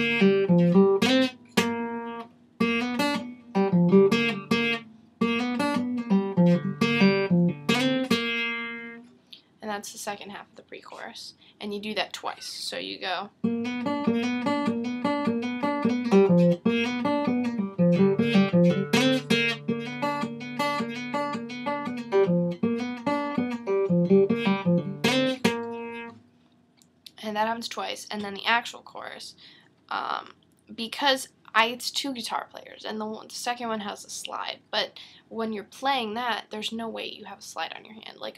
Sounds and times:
Strum: 0.0s - 9.1s, 13.4s - 26.4s
Speech: 9.6s - 13.4s, 27.1s - 38.3s.

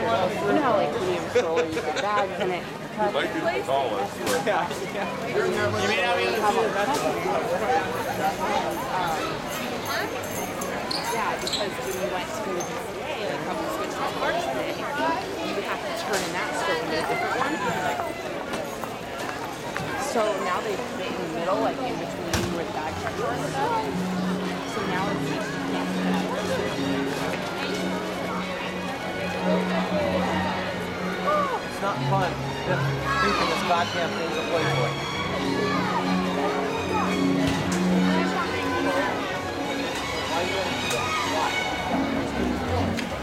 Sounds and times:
Speech: 0.0s - 43.2s.

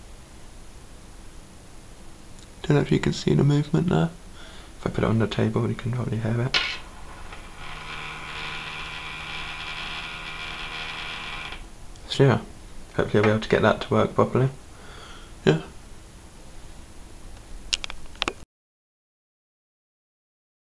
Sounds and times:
Speech: 2.6s - 4.2s, 4.8s - 6.6s, 12.0s - 14.6s, 15.4s - 15.8s
Vibration: 6.6s - 11.7s.

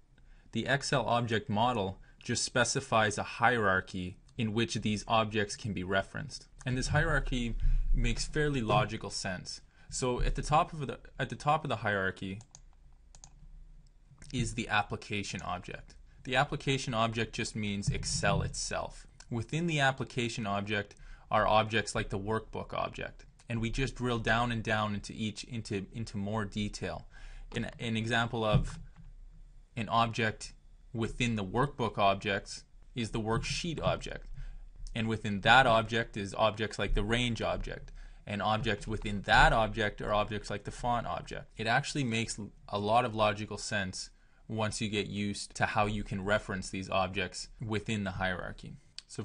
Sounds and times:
Speech: 0.5s - 12.6s, 14.2s - 28.8s, 29.8s - 34.3s, 34.9s - 49.2s.

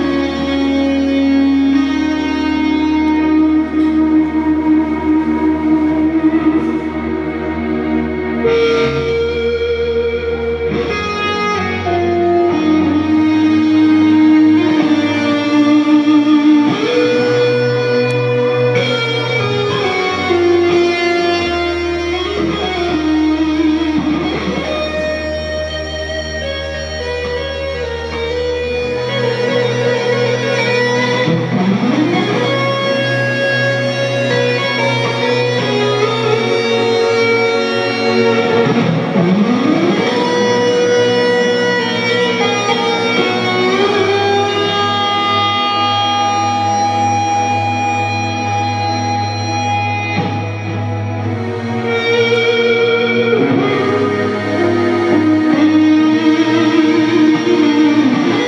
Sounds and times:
Guitar: 0.0s - 58.4s.

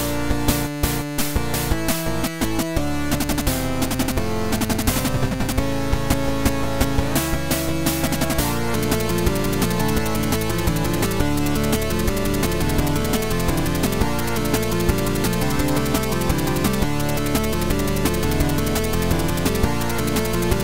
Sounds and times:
Music: 0.0s - 20.6s.

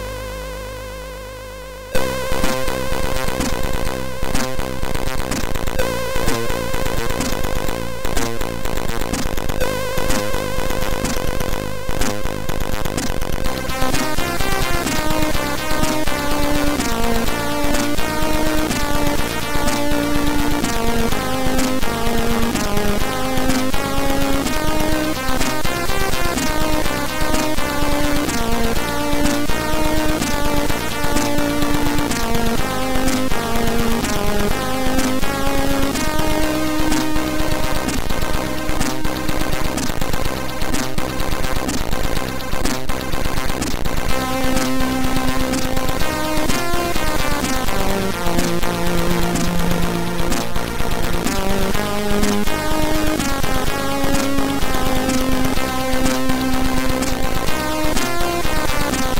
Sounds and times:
Music: 0.0s - 59.1s.

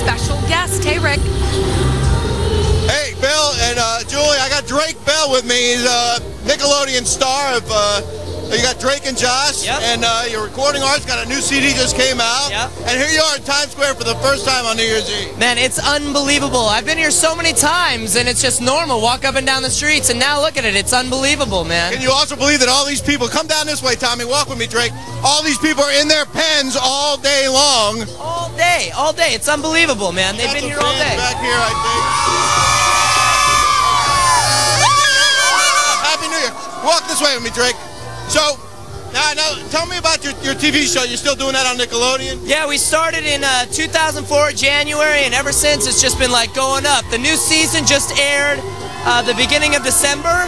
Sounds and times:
Music: 0.0s - 50.4s
Speech: 2.9s - 31.8s.

